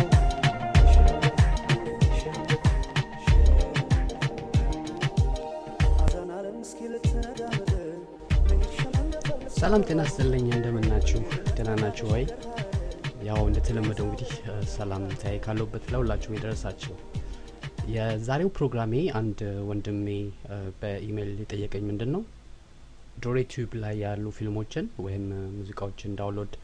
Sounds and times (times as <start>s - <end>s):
Music: 0.0s - 19.0s
Speech: 9.5s - 12.4s, 13.2s - 17.0s, 17.8s - 22.3s, 23.2s - 26.6s.